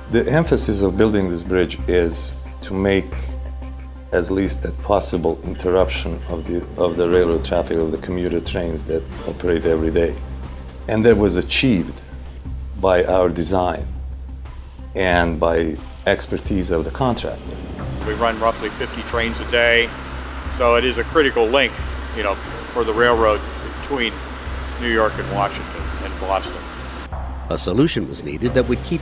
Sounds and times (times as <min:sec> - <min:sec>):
Music: 0:00.0 - 0:29.0
Speech: 0:00.1 - 0:03.3, 0:04.1 - 0:10.2, 0:10.9 - 0:12.0, 0:12.8 - 0:13.9, 0:15.0 - 0:17.4, 0:18.0 - 0:19.9, 0:20.6 - 0:24.2, 0:24.8 - 0:26.6, 0:27.5 - 0:29.0.